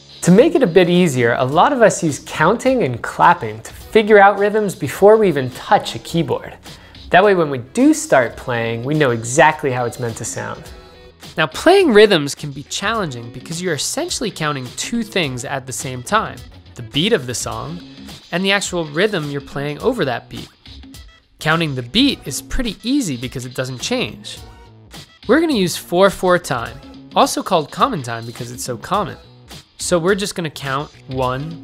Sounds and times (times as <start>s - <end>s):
Music: 0.0s - 31.6s
Speech: 0.2s - 10.7s, 11.4s - 20.5s, 21.4s - 24.4s, 25.3s - 29.2s, 29.8s - 31.6s.